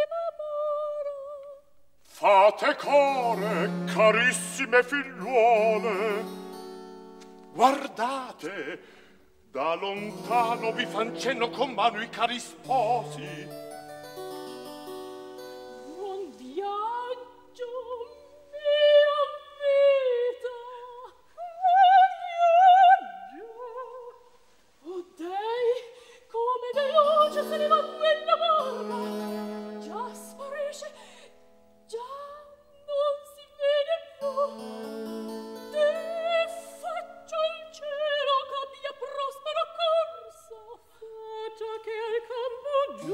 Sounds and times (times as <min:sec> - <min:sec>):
Music: 0:01.5 - 0:21.3, 0:26.2 - 0:43.1.